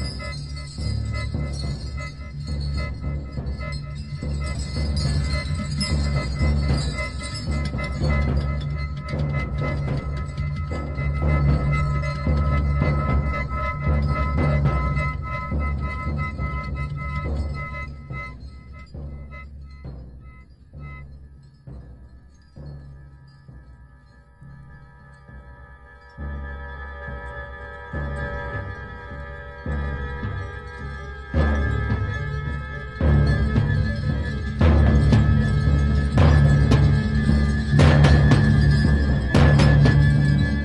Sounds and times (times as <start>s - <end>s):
Music: 0.0s - 40.6s.